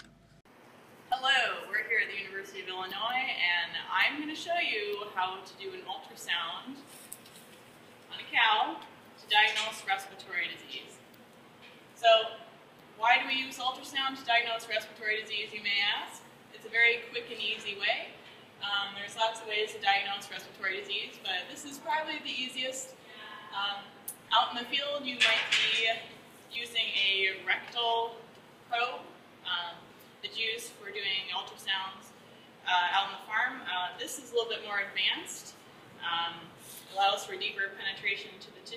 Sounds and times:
Speech: 1.1s - 6.9s, 8.1s - 11.0s, 12.0s - 12.4s, 13.0s - 38.7s.

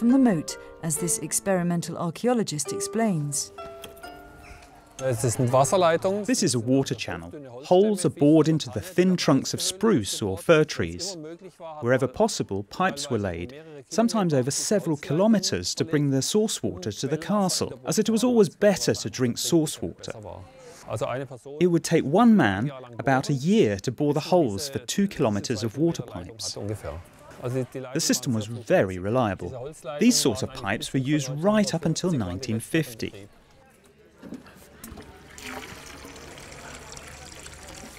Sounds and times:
Speech: 0.0s - 3.5s, 5.0s - 33.8s
Music: 0.0s - 6.9s.

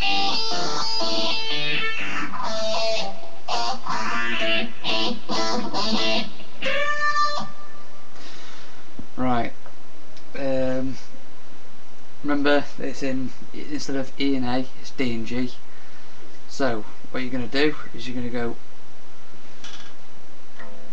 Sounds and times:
Electric guitar: 0.0s - 7.8s
Speech: 9.2s - 9.6s, 10.3s - 11.1s, 12.2s - 15.6s, 16.5s - 18.6s.

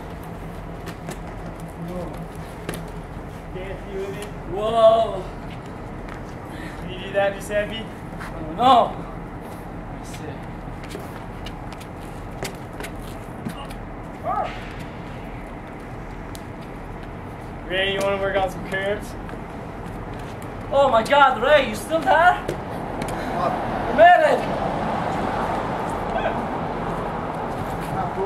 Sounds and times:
Speech: 17.7s - 19.2s, 20.7s - 22.5s.

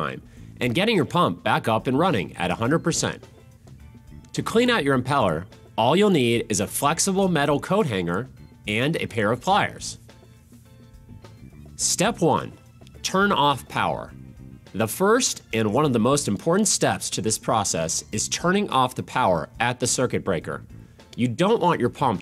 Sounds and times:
Speech: 0.0s - 3.2s, 4.3s - 10.0s, 11.8s - 14.1s, 14.8s - 20.6s, 21.2s - 22.2s
Music: 0.0s - 22.2s.

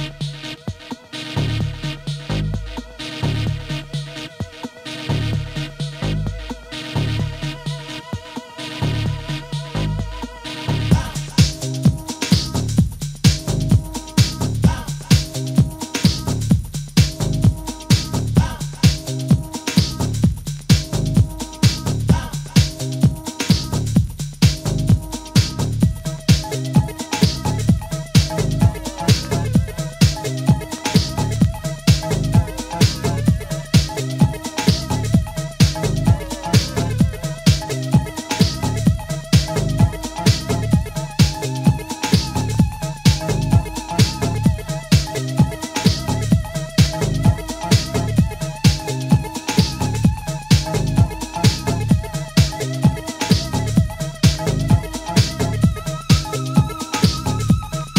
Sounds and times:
Dance music: 0.0s - 57.9s
Disco: 0.0s - 57.9s.

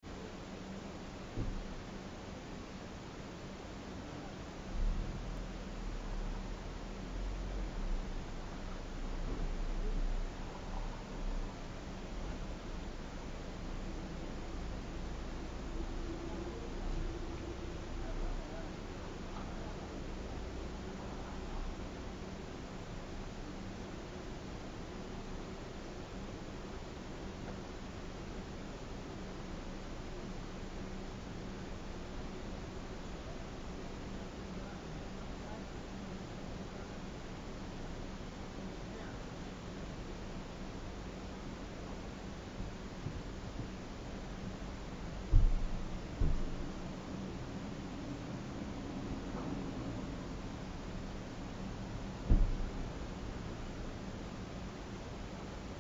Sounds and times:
Speech: 0.1s - 13.0s, 13.6s - 24.2s, 28.4s - 40.6s.

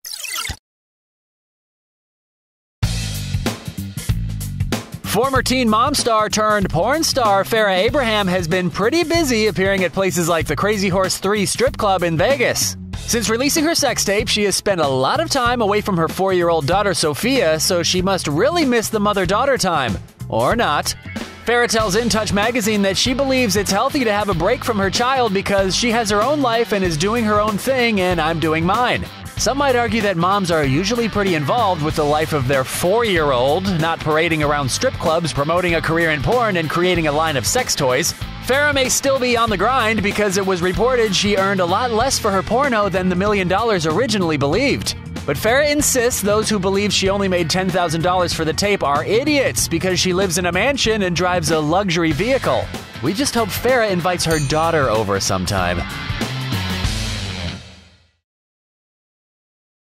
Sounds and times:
Music: 2.8s - 58.2s
Speech: 5.1s - 55.8s.

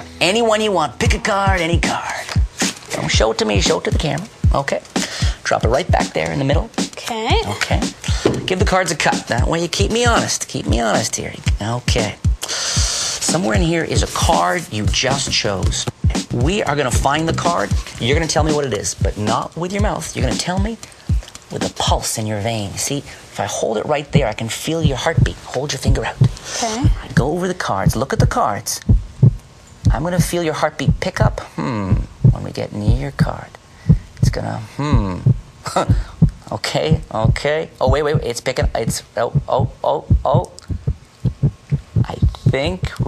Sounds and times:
Heart sounds, heartbeat: 1.1s - 4.6s, 5.3s - 6.0s, 24.2s - 27.3s, 27.9s - 33.3s, 33.9s - 43.0s.

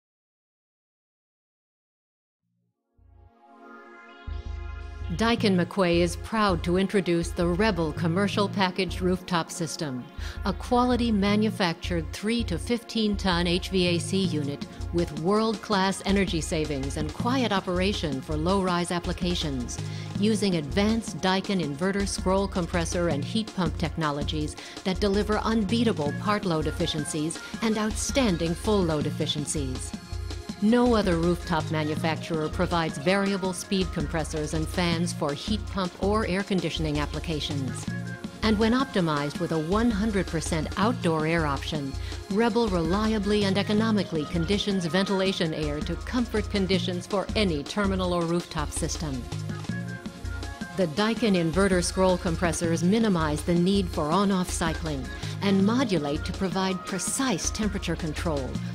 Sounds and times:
Music: 2.7s - 58.7s
Speech: 5.1s - 29.9s, 30.6s - 37.8s, 38.4s - 49.3s, 50.8s - 58.6s.

